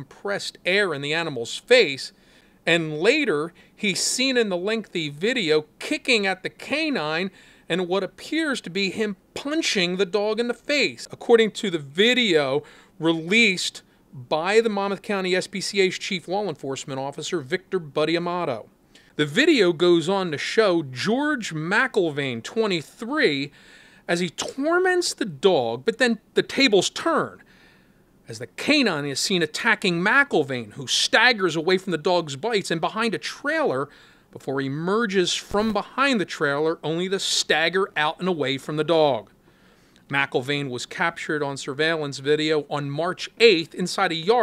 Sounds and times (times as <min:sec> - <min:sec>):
Speech: 0:00.0 - 0:23.5, 0:24.1 - 0:27.4, 0:28.3 - 0:39.3, 0:40.1 - 0:44.4.